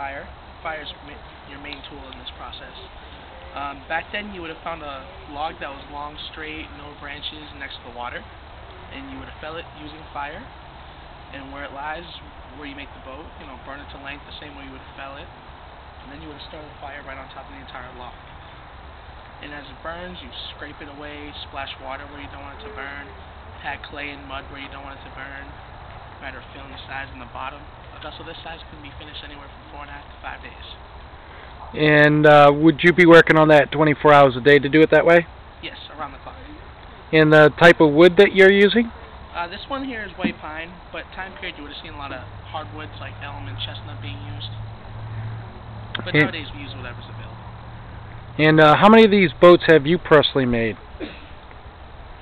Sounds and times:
Speech: 0.0s - 3.0s, 3.6s - 8.3s, 8.9s - 10.5s, 11.3s - 15.3s, 16.0s - 18.2s, 19.4s - 25.6s, 26.2s - 30.8s, 31.8s - 44.6s, 46.0s - 47.4s, 48.4s - 50.8s.

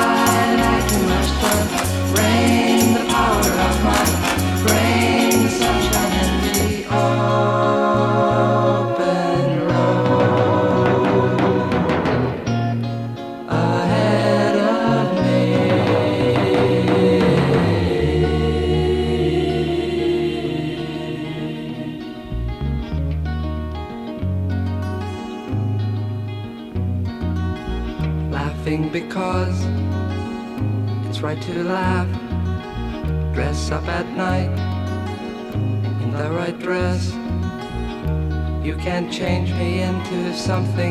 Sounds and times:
Music: 0.0s - 40.9s.

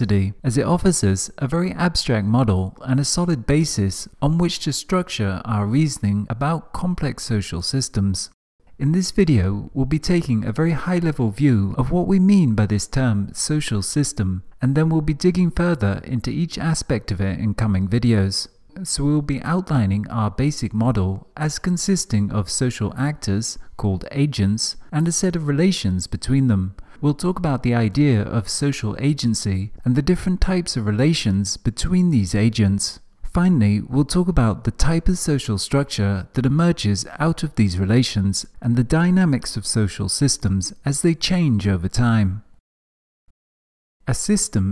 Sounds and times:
Speech: 0.0s - 42.6s, 44.1s - 44.7s.

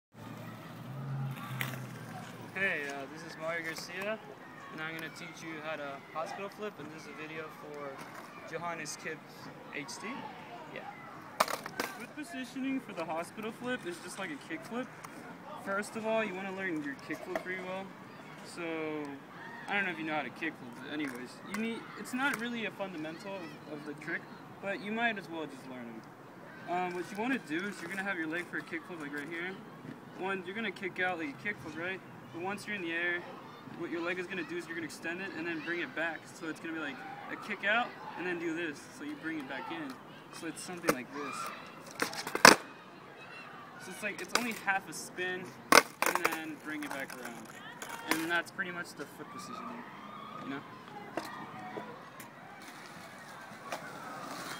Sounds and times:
Skateboard: 0.9s - 2.5s, 11.4s - 12.1s, 40.7s - 42.7s, 44.2s - 44.6s, 45.7s - 48.3s, 52.6s - 54.5s.

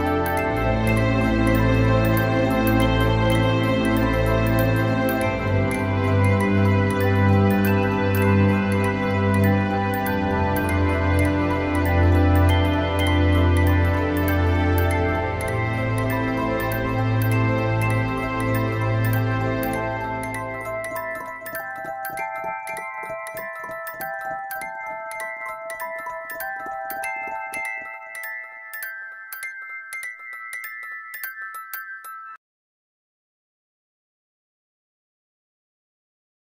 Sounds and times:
Glockenspiel: 0.0s - 32.4s.

